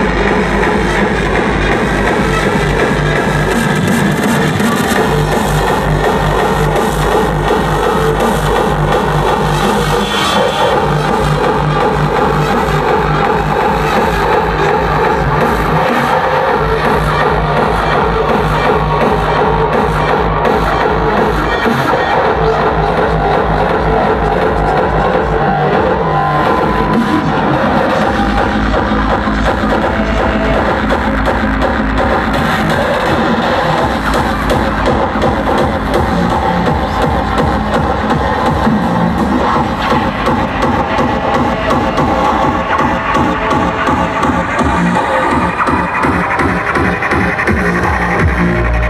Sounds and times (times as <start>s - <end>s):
Techno: 0.0s - 48.8s.